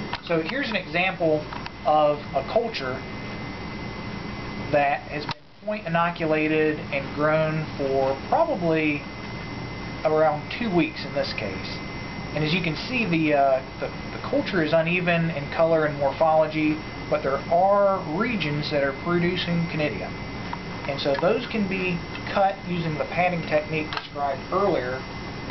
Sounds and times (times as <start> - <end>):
Speech: 0.2 - 3.0, 4.7 - 9.1, 10.0 - 20.2, 20.9 - 25.0.